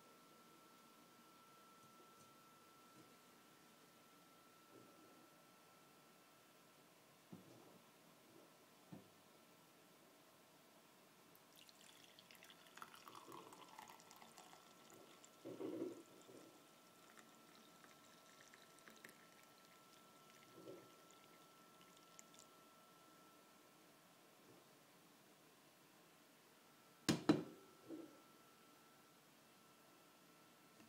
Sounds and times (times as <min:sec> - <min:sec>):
Trickle, dribble: 0:11.4 - 0:22.5.